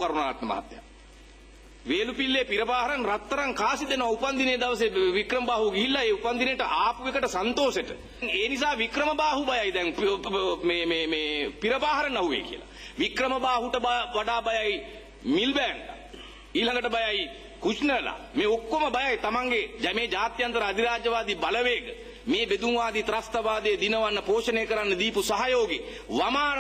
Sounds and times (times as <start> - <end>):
Male speech, man speaking: 0.0 - 0.8, 1.9 - 16.0, 16.6 - 26.6
Narration, monologue: 0.0 - 26.6.